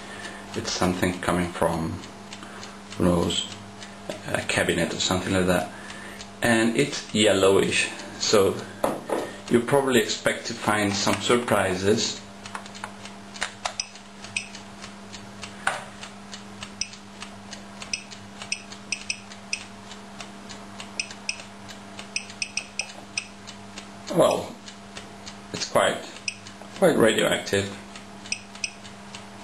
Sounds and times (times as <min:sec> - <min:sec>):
Speech: 0:00.6 - 0:02.1, 0:03.0 - 0:05.8, 0:06.4 - 0:08.7, 0:09.5 - 0:12.3, 0:24.1 - 0:24.6, 0:25.6 - 0:26.2, 0:26.8 - 0:27.8.